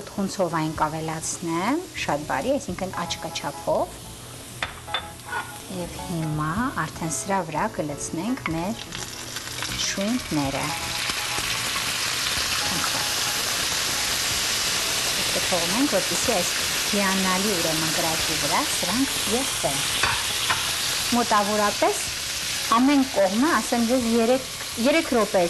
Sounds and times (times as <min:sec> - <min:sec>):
Frying (food): 0:00.0 - 0:25.4
Music: 0:00.0 - 0:25.4.